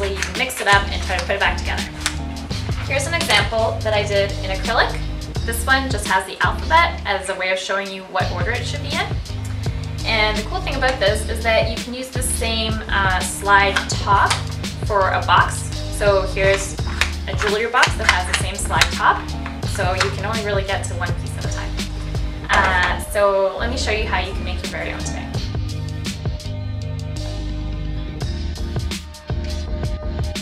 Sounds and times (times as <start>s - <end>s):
Speech: 0.0s - 1.9s, 2.9s - 9.2s, 10.0s - 21.8s, 22.5s - 25.4s
Music: 0.0s - 30.4s.